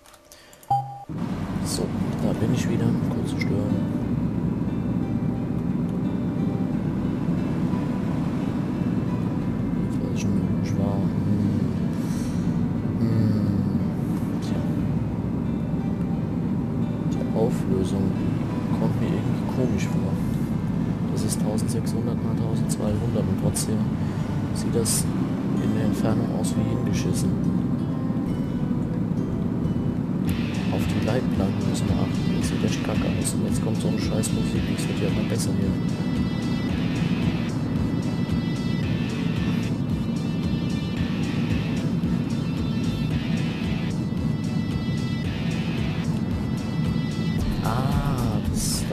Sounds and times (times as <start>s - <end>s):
Music: 0.0s - 48.9s
Vehicle: 0.7s - 48.9s
Speech: 1.6s - 3.9s, 9.9s - 11.7s, 13.0s - 14.8s, 17.1s - 20.3s, 21.1s - 23.9s, 24.6s - 27.4s, 30.6s - 35.8s, 47.5s - 48.9s.